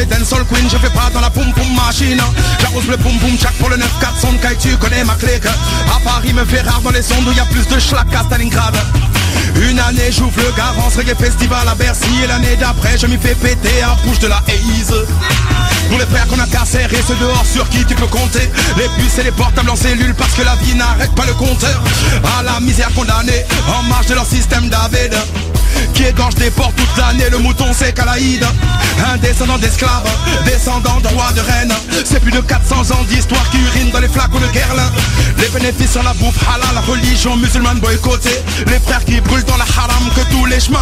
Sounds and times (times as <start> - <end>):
Music: 0.0 - 40.8.